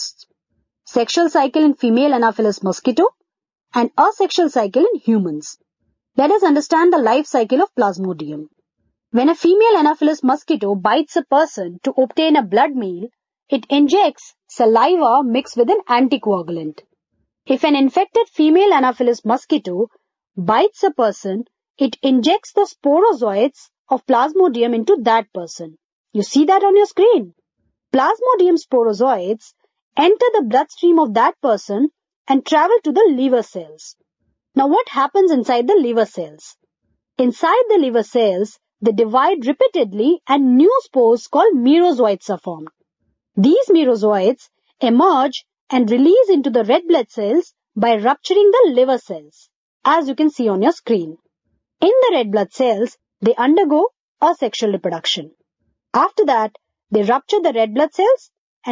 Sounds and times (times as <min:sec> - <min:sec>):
Speech: 0:00.0 - 0:00.2, 0:00.9 - 0:03.1, 0:03.8 - 0:05.6, 0:06.2 - 0:08.5, 0:09.2 - 0:16.8, 0:17.5 - 0:27.3, 0:28.0 - 0:33.9, 0:34.6 - 0:36.5, 0:37.2 - 0:42.7, 0:43.4 - 0:51.2, 0:51.8 - 0:55.3, 0:56.0 - 0:58.7.